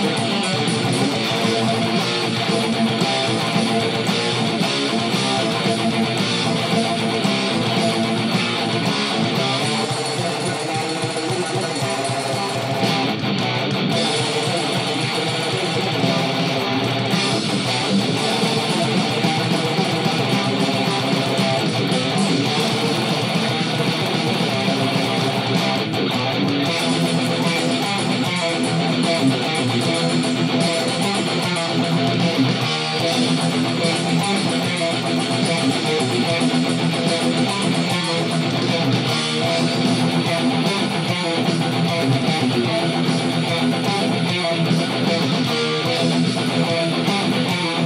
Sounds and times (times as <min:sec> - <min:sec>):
Guitar: 0:00.0 - 0:47.8
Heavy metal: 0:00.0 - 0:47.8.